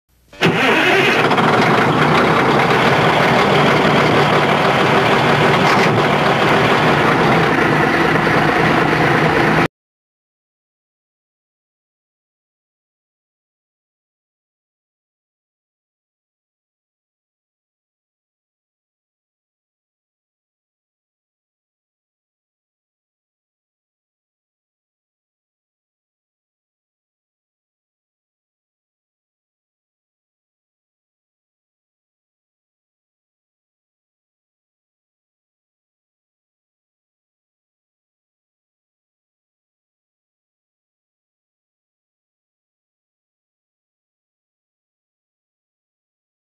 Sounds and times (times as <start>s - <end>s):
Truck: 0.3s - 9.7s.